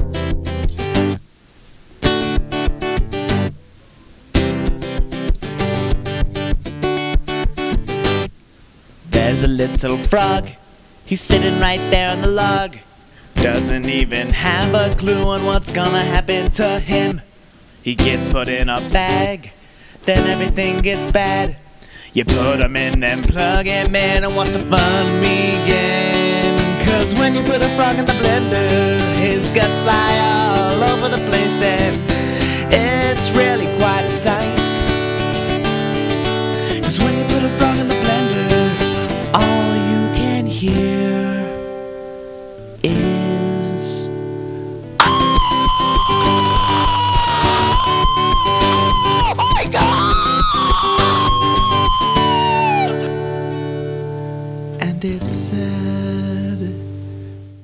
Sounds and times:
Music: 0:00.0 - 0:01.2, 0:02.0 - 0:03.6, 0:04.3 - 0:08.3, 0:09.1 - 0:10.5, 0:11.3 - 0:12.6, 0:13.4 - 0:17.2, 0:17.9 - 0:19.3, 0:20.1 - 0:21.6, 0:22.2 - 0:57.6.

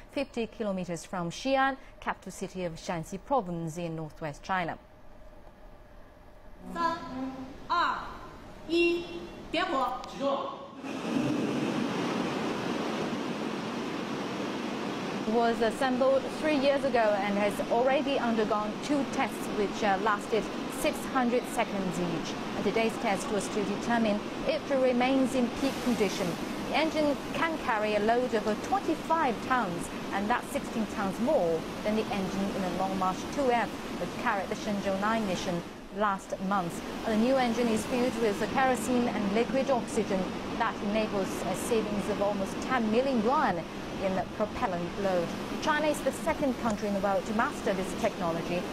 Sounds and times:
Speech: 0:15.3 - 0:48.7.

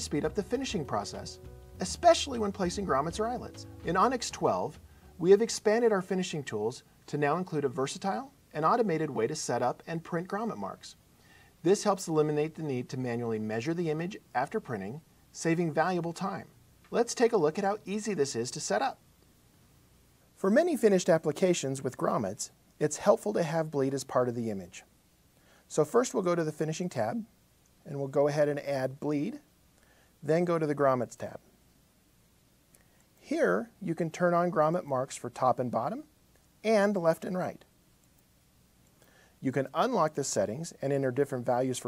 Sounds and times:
Speech: 0:00.0 - 0:11.0, 0:11.6 - 0:19.0, 0:20.4 - 0:24.9, 0:25.7 - 0:29.5, 0:30.2 - 0:31.5, 0:33.2 - 0:37.7, 0:39.4 - 0:41.8.

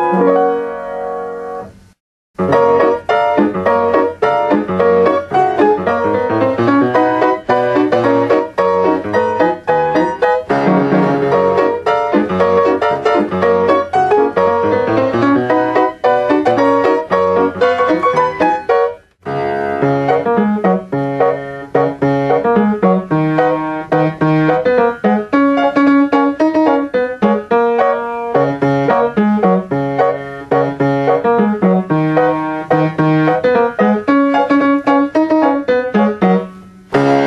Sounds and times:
Music: 0:00.0 - 0:37.2.

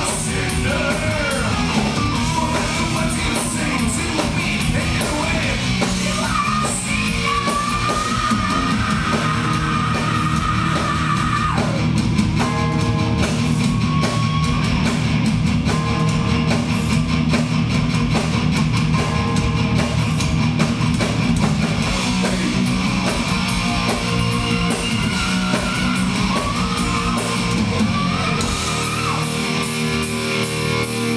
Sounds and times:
Music: 0:00.0 - 0:31.1.

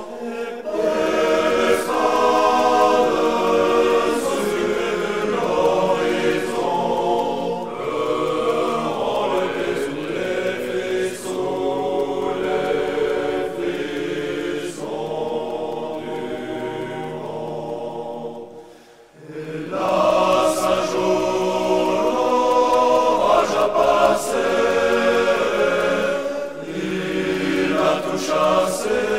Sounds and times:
Mantra: 0:00.0 - 0:29.1.

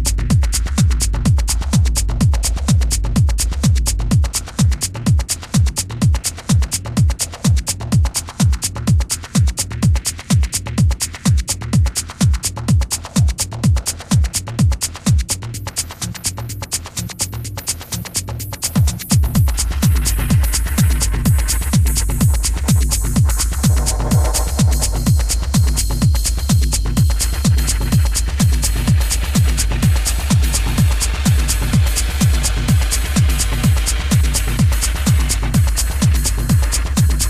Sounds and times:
House music: 0:00.0 - 0:37.3.

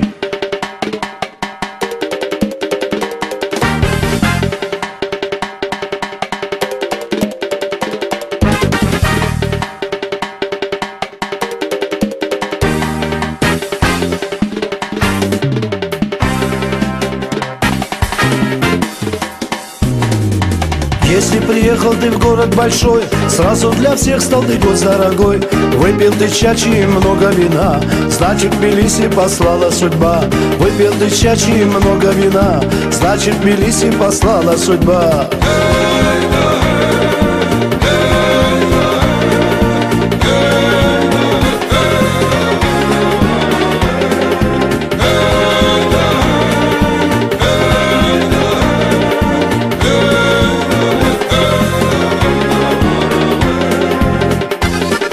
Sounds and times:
Traditional music: 0:00.0 - 0:55.1.

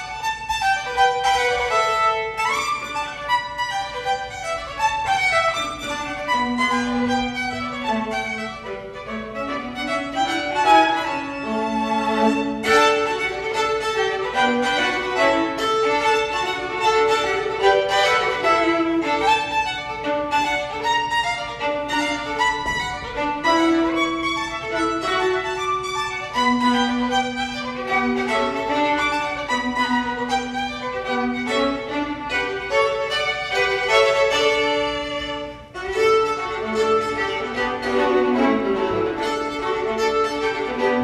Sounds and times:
Violin, fiddle: 0:00.0 - 0:41.0.

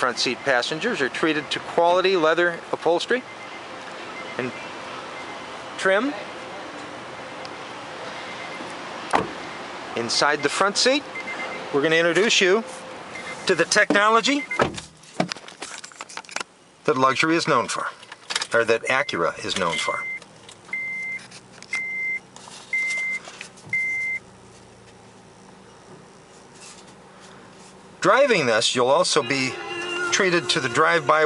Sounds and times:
Speech: 0:00.0 - 0:03.2, 0:05.8 - 0:06.8, 0:10.0 - 0:11.1, 0:11.7 - 0:12.7, 0:13.5 - 0:14.5, 0:16.9 - 0:20.1, 0:28.0 - 0:31.2
Car: 0:00.0 - 0:31.2.

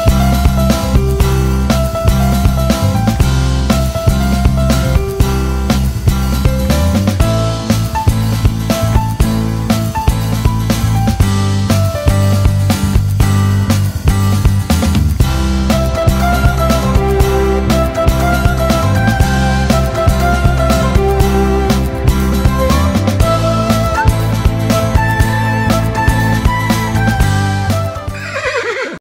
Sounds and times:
Music: 0:00.0 - 0:28.8
Horse: 0:28.2 - 0:29.0.

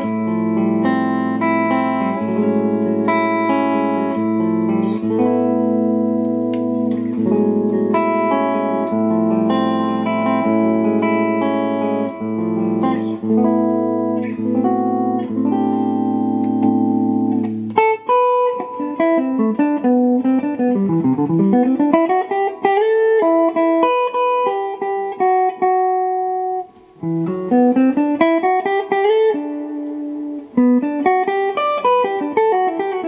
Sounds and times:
Guitar: 0:00.0 - 0:33.0.

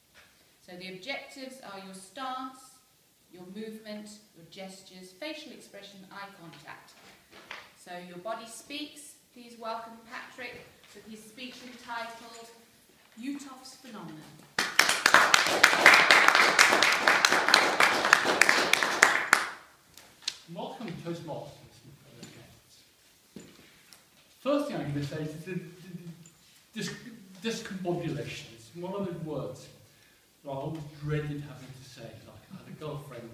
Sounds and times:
Narration, monologue: 0:00.0 - 0:14.6, 0:19.6 - 0:33.3
Female speech, woman speaking: 0:00.7 - 0:02.8, 0:03.4 - 0:07.0, 0:07.8 - 0:14.4.

